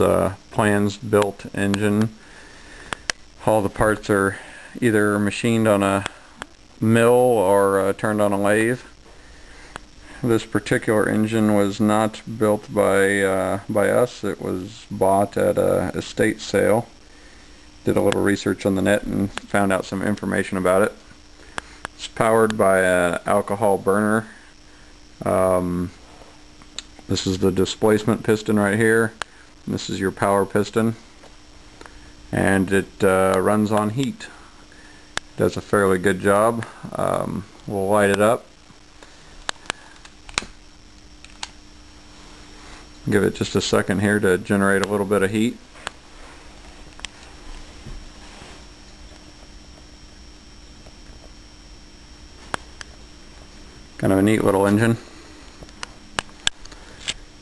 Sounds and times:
Speech: 0.0 - 2.2, 3.4 - 6.2, 6.8 - 9.0, 10.2 - 17.0, 17.8 - 21.0, 22.0 - 24.4, 25.2 - 26.0, 27.1 - 31.0, 32.3 - 34.4, 35.4 - 38.5, 43.0 - 45.6, 54.0 - 55.1.

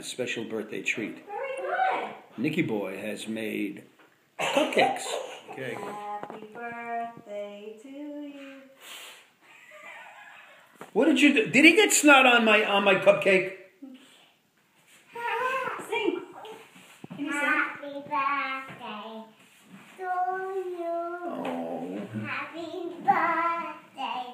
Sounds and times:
Laughter: 9.5 - 10.8.

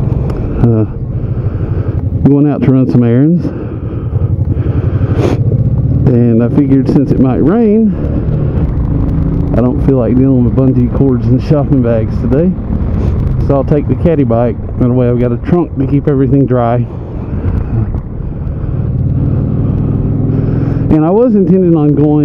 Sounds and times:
Speech: 2.2 - 3.5, 6.1 - 8.0, 9.5 - 12.6, 13.4 - 16.9, 20.9 - 22.2.

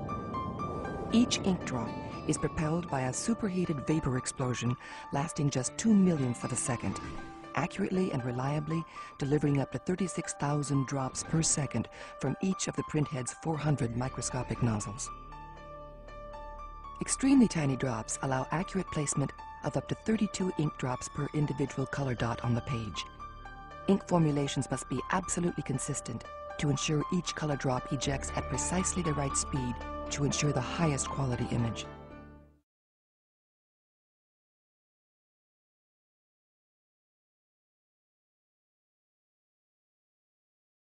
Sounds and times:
Music: 0.0 - 32.6
Speech: 1.2 - 15.1, 17.0 - 23.1, 23.9 - 31.9.

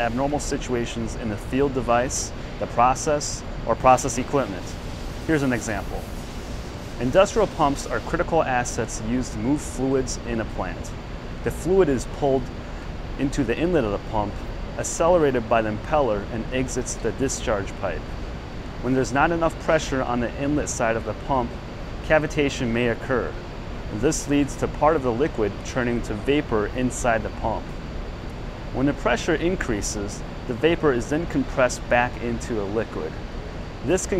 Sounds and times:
Speech: 0.0 - 6.0, 7.0 - 12.5, 13.2 - 18.0, 18.8 - 27.7, 28.8 - 33.2, 33.8 - 34.2.

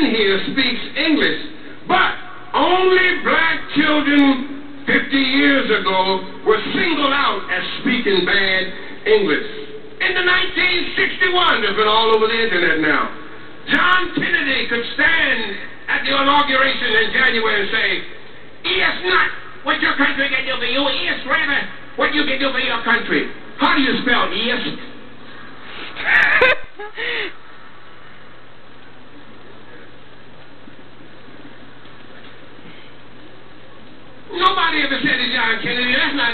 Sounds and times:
Male speech, man speaking: 0.0 - 24.9, 34.3 - 36.3.

